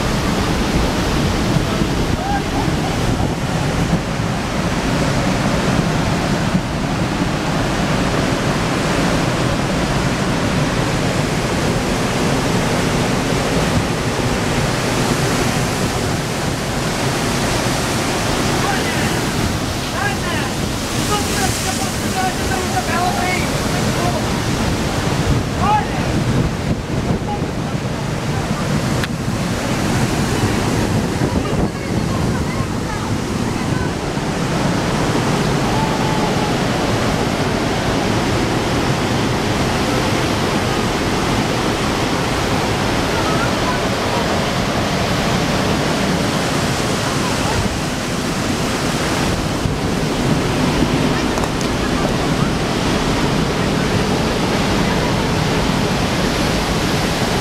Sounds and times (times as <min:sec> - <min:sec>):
Waves, surf: 0:00.0 - 0:57.4.